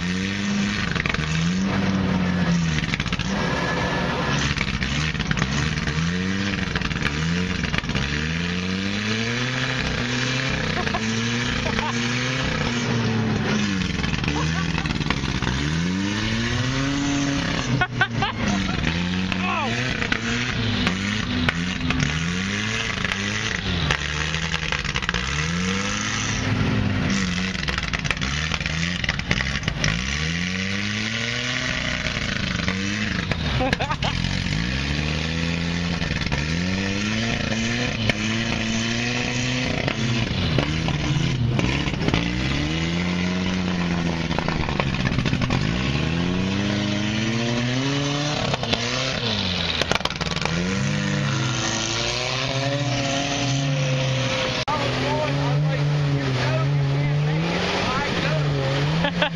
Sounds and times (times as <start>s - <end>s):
Outside, rural or natural: 0.0s - 59.3s
Truck: 0.0s - 59.3s.